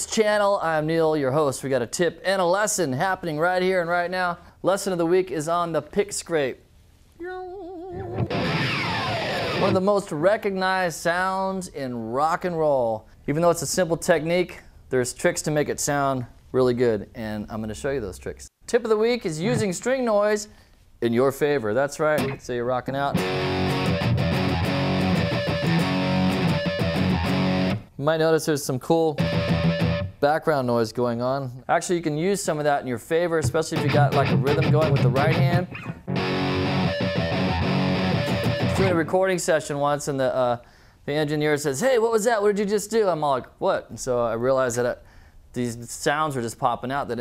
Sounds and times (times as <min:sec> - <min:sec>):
Speech: 0:00.0 - 0:06.6, 0:07.2 - 0:08.2, 0:09.6 - 0:23.2, 0:28.0 - 0:29.2, 0:30.2 - 0:35.7, 0:38.8 - 0:47.2
Music: 0:08.0 - 0:09.8, 0:23.1 - 0:27.9, 0:29.2 - 0:30.2, 0:33.8 - 0:39.1.